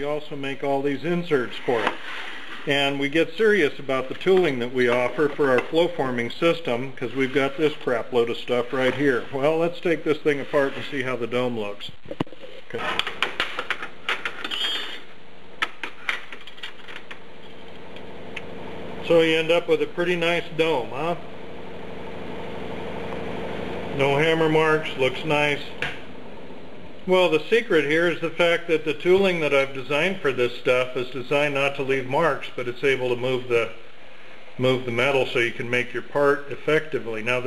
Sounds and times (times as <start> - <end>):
Speech: 0.0 - 2.0, 2.7 - 12.0, 19.0 - 21.3, 23.9 - 25.8, 27.1 - 33.8, 34.6 - 37.4.